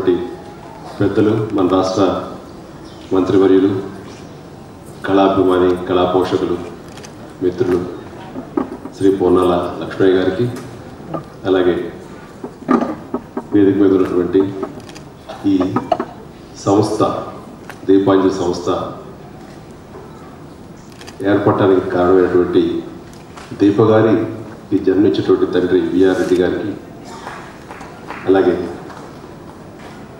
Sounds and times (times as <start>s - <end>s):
Male speech, man speaking: 0.0s - 0.4s, 1.0s - 2.4s, 3.1s - 4.0s, 5.0s - 6.7s, 7.4s - 8.3s, 9.0s - 10.6s, 11.4s - 12.0s, 13.5s - 14.6s, 15.3s - 15.8s, 16.6s - 19.0s, 21.2s - 23.0s, 23.6s - 26.8s, 28.2s - 28.8s
Narration, monologue: 0.0s - 19.8s, 20.5s - 27.1s.